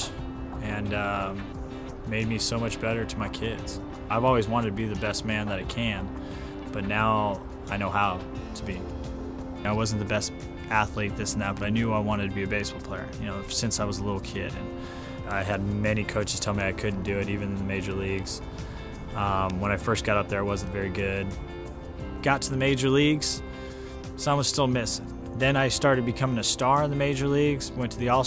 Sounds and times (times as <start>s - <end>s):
Speech: 0.0s - 1.5s, 2.1s - 6.1s, 6.7s - 8.9s, 9.6s - 18.4s, 19.2s - 21.4s, 22.2s - 23.4s, 24.2s - 28.2s
Music: 0.0s - 28.2s.